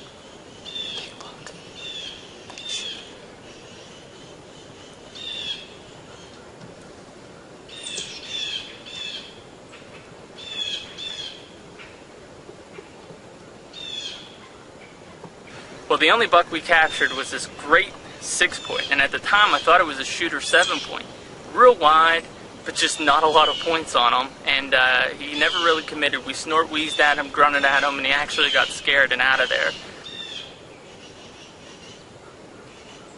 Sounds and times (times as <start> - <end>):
Outside, rural or natural: 0.0 - 33.1.